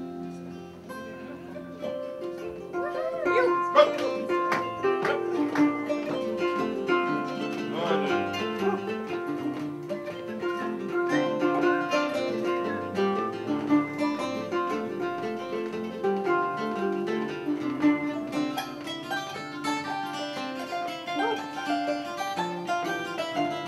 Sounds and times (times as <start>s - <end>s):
Harp: 0.0s - 23.6s
Ukulele: 0.0s - 23.6s.